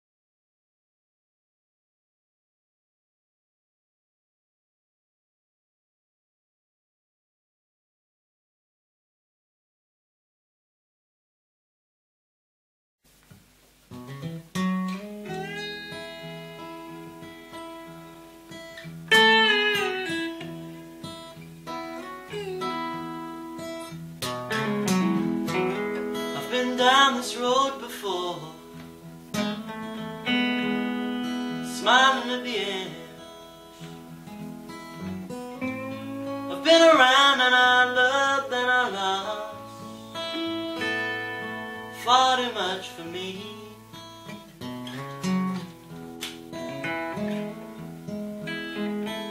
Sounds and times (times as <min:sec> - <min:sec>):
Music: 0:13.3 - 0:49.3.